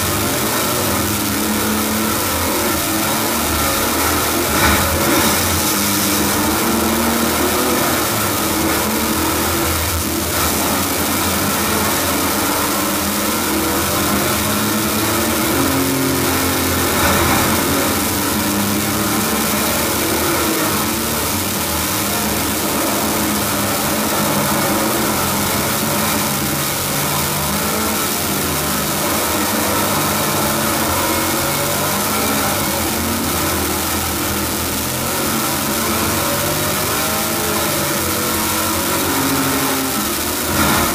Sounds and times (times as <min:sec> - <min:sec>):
Car: 0:00.0 - 0:40.9.